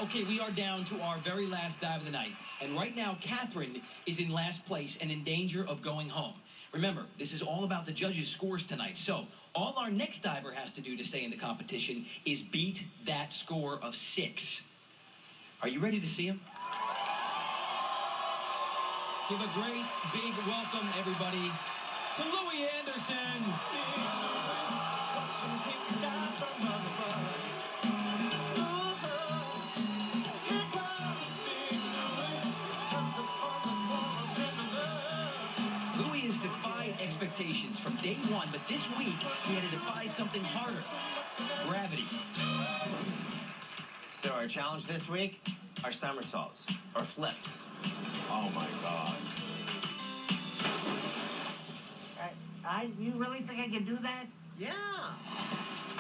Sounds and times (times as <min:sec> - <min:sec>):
Music: 0:00.0 - 0:05.7, 0:19.0 - 0:53.4, 0:54.1 - 0:56.0
Speech: 0:00.0 - 0:14.7, 0:15.6 - 0:16.4, 0:19.3 - 0:21.6, 0:22.2 - 0:24.2, 0:36.0 - 0:42.1, 0:44.1 - 0:47.6.